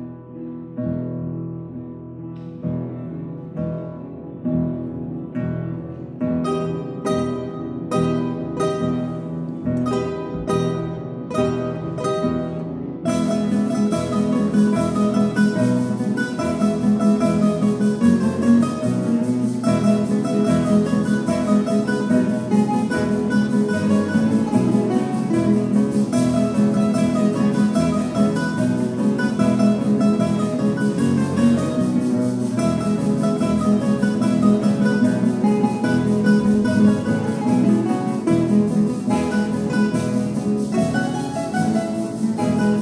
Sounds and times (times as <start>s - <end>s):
Strum: 1.7s - 42.8s.